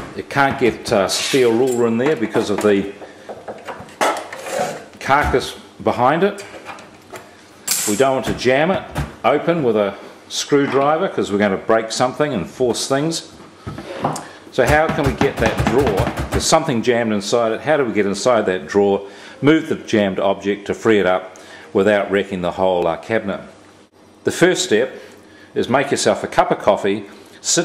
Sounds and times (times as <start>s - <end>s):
Speech: 0.2s - 3.0s, 5.0s - 6.5s, 7.8s - 23.6s, 24.2s - 25.0s, 25.6s - 27.6s.